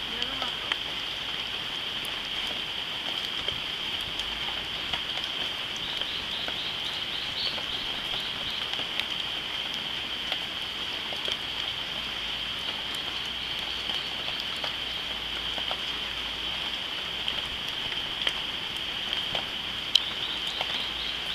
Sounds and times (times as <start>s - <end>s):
Outside, rural or natural: 0.0s - 21.3s.